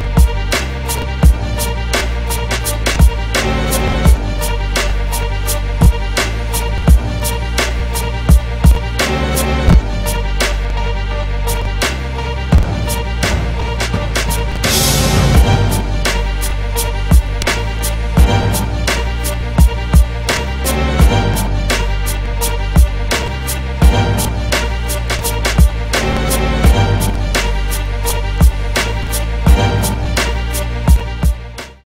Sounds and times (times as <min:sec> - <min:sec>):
Music: 0:00.0 - 0:31.8.